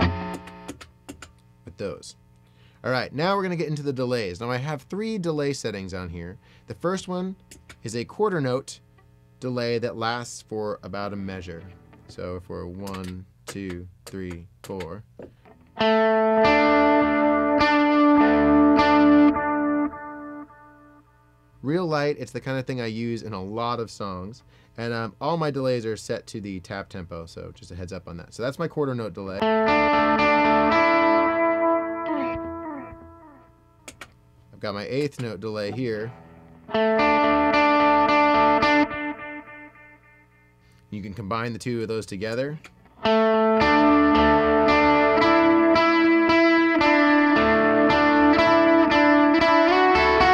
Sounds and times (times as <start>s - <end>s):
Guitar: 0.0s - 22.4s, 28.8s - 40.8s, 41.8s - 50.3s
Speech: 1.7s - 2.2s, 2.8s - 8.8s, 9.4s - 15.1s, 21.6s - 29.5s, 34.5s - 36.2s, 40.9s - 42.7s.